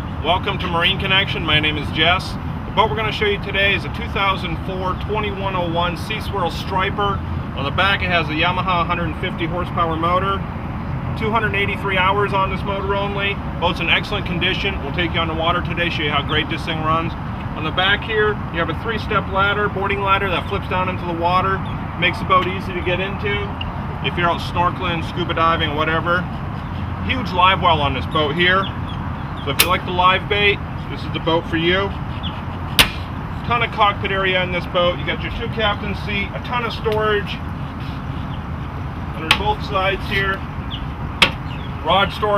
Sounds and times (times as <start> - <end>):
Speech: 0.2 - 10.4, 11.2 - 26.3, 27.0 - 28.7, 29.5 - 32.0, 33.4 - 37.4, 39.2 - 40.4, 41.8 - 42.3.